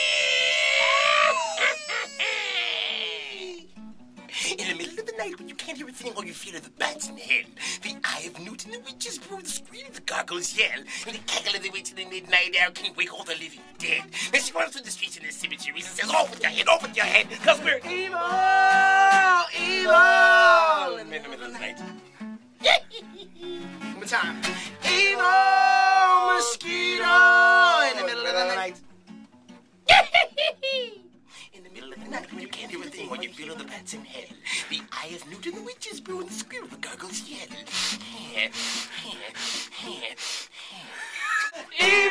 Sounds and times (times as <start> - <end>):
Music: 3.0 - 40.1, 41.7 - 42.1
Speech: 4.4 - 18.0, 19.4 - 21.8, 31.5 - 37.6.